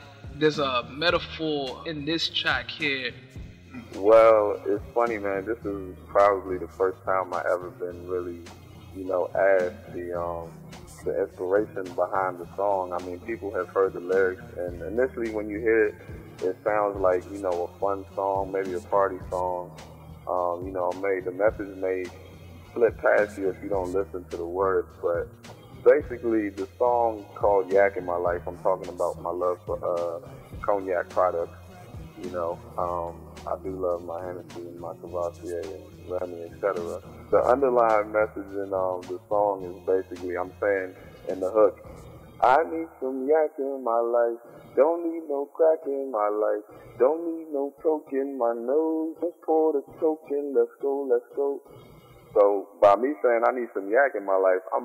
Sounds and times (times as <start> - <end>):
Speech: 0.0 - 3.2, 3.8 - 22.2, 22.8 - 31.6, 32.2 - 51.6, 52.4 - 54.8
Music: 0.0 - 54.8.